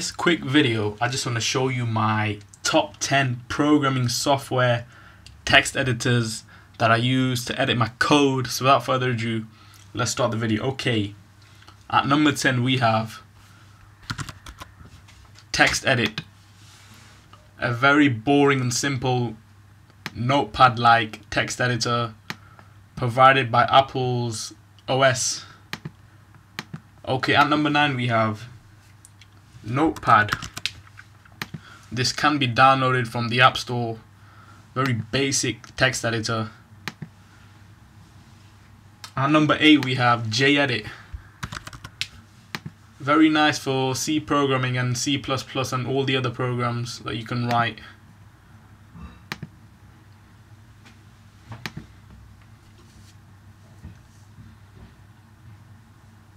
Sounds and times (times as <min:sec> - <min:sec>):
Speech: 0:00.0 - 0:11.2, 0:11.9 - 0:13.3, 0:15.5 - 0:16.3, 0:17.6 - 0:19.4, 0:20.1 - 0:22.2, 0:23.0 - 0:25.6, 0:27.0 - 0:28.6, 0:29.6 - 0:30.5, 0:31.9 - 0:34.1, 0:34.8 - 0:36.6, 0:39.1 - 0:41.1, 0:43.0 - 0:48.0.